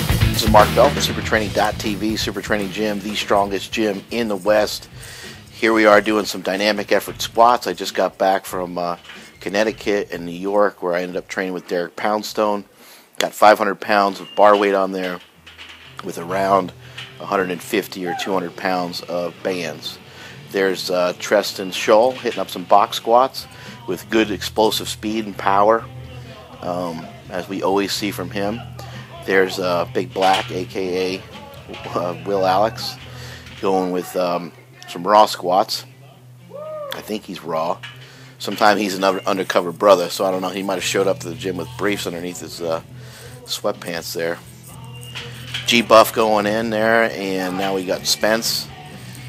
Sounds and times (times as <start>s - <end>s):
Music: 0.0s - 49.2s
Speech: 0.4s - 4.9s, 5.5s - 15.2s, 16.0s - 25.9s, 26.6s - 36.2s, 36.9s - 37.8s, 38.4s - 44.4s, 45.6s - 48.7s.